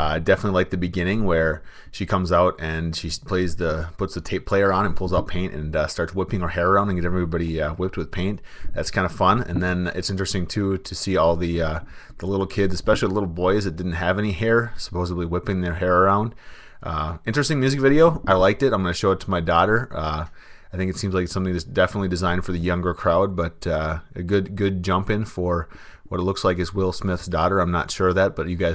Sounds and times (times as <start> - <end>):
Speech: 0.0 - 28.7.